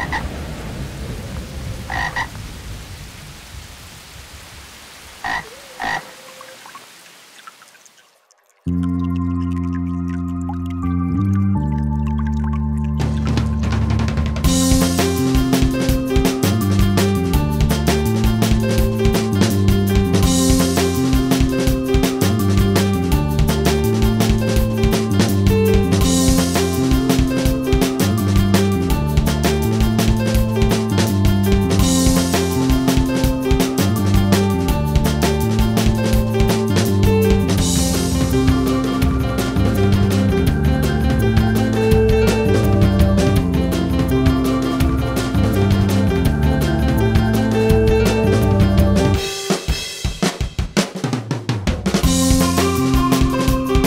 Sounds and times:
Music: 8.7 - 53.8.

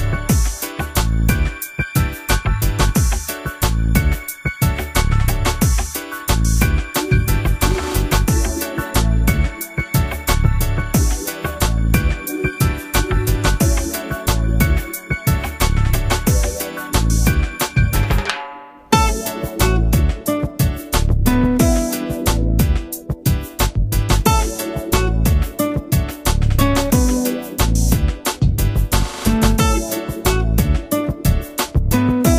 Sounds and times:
Music: 0.0 - 32.3.

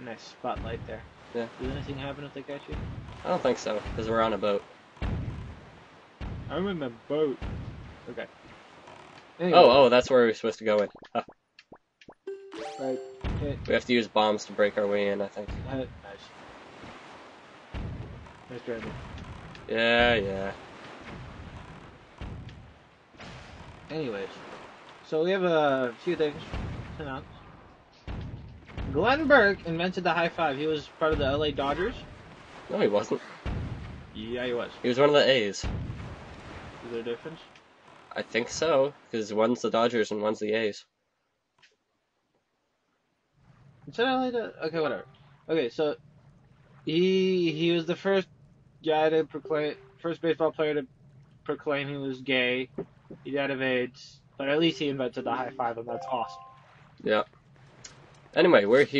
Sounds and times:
Speech: 0.0 - 4.6, 6.5 - 7.4, 8.1 - 8.3, 9.4 - 11.2, 12.6 - 16.3, 18.5 - 19.0, 19.7 - 20.6, 23.9 - 24.4, 25.1 - 27.2, 29.0 - 32.0, 32.7 - 33.2, 34.2 - 35.7, 36.8 - 37.4, 38.1 - 40.8, 43.9 - 46.0, 46.9 - 48.2, 48.9 - 50.8, 51.5 - 56.4, 57.0 - 57.2, 58.4 - 58.9.

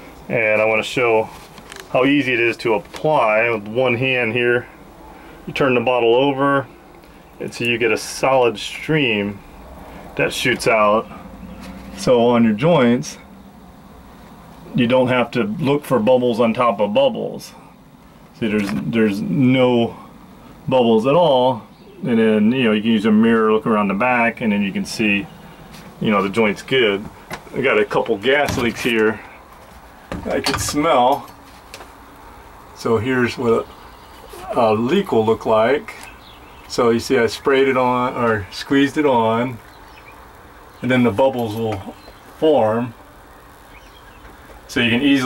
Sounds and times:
Speech: 0.3 - 4.8, 5.5 - 6.8, 7.4 - 9.4, 10.2 - 11.2, 12.0 - 13.3, 14.7 - 17.7, 18.4 - 20.1, 20.7 - 25.4, 26.0 - 29.4, 30.2 - 31.3, 32.8 - 33.7, 34.3 - 36.1, 36.7 - 39.6, 40.8 - 43.0, 44.7 - 45.2.

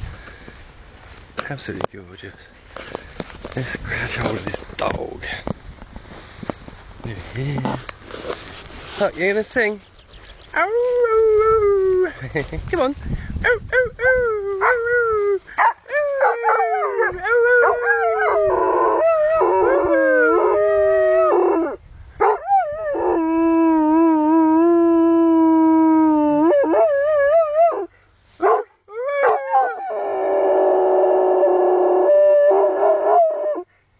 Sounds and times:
Speech: 1.4 - 2.5, 3.6 - 5.4, 9.0 - 9.8.

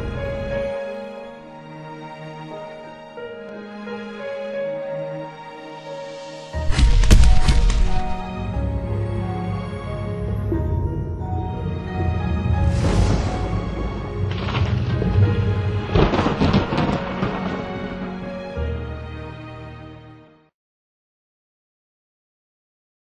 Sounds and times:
Music: 0.0 - 20.6.

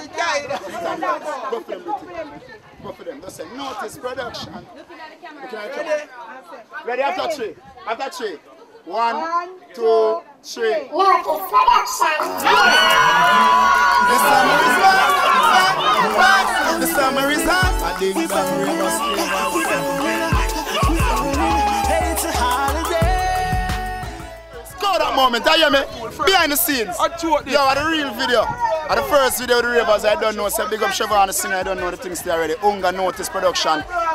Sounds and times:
Hip hop music: 11.2 - 34.1.

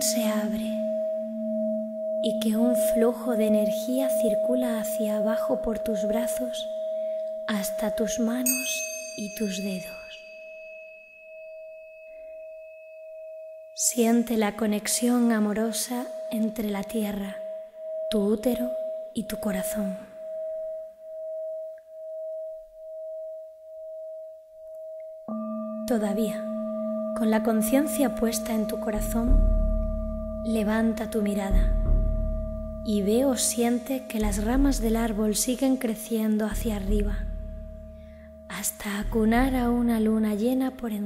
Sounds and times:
Speech: 0.0 - 0.8, 2.3 - 6.7, 7.5 - 10.2, 13.8 - 17.4, 18.1 - 20.1, 25.9 - 26.5, 27.2 - 29.5, 30.5 - 31.8, 32.9 - 37.3, 38.5 - 41.0
Music: 0.0 - 13.8, 16.0 - 41.0.

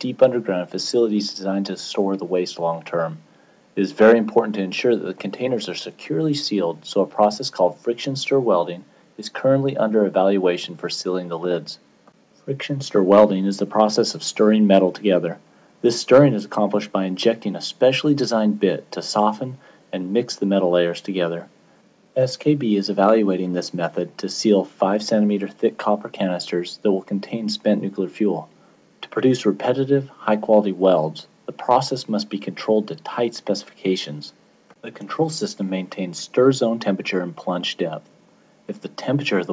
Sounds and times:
Speech: 0.0 - 11.8, 12.5 - 21.5, 22.2 - 38.1, 38.7 - 39.5.

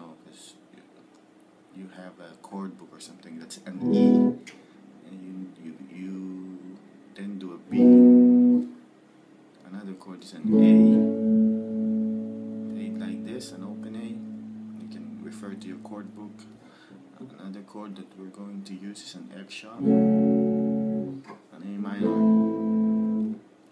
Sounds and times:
Speech: 0.0 - 1.0, 1.7 - 4.3, 5.0 - 7.8, 9.6 - 11.1, 12.7 - 19.9, 21.3 - 22.4
Strum: 3.8 - 4.5, 10.4 - 16.6, 22.0 - 23.4.

